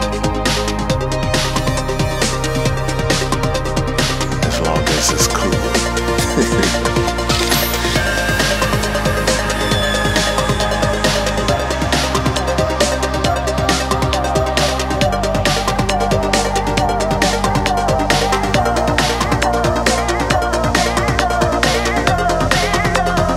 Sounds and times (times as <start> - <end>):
Drum and bass: 0.0 - 23.3.